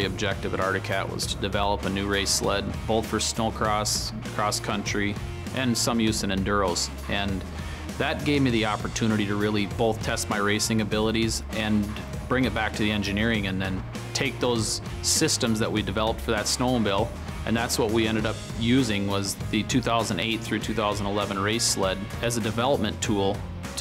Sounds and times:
Music: 0.0s - 23.8s
Speech: 0.0s - 23.8s.

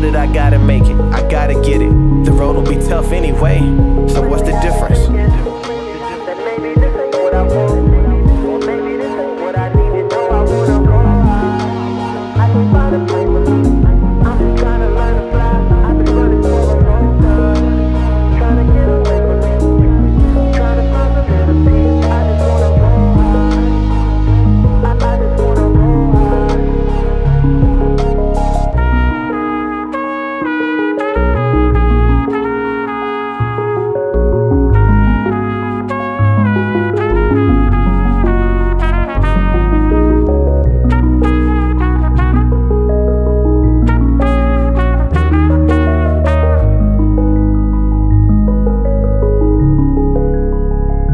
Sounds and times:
Trumpet: 0.0s - 48.1s.

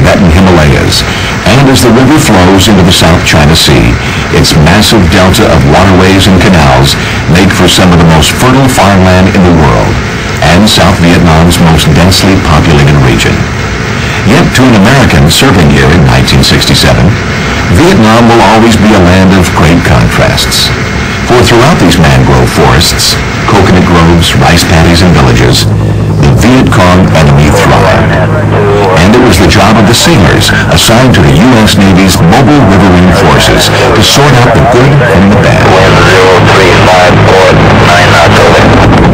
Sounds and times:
Speech: 0.0s - 13.5s, 14.2s - 20.7s, 21.3s - 38.9s.

